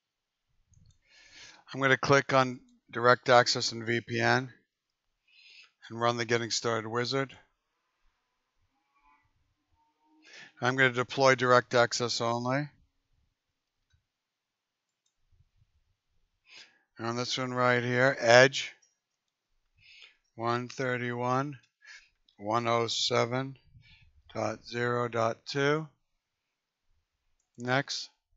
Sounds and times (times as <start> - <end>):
Inside, small room: 0.0 - 28.3
Speech: 1.7 - 4.5, 5.8 - 7.4, 10.5 - 12.7, 17.0 - 18.8, 20.4 - 21.6, 22.4 - 23.6, 24.3 - 25.9, 27.6 - 28.2.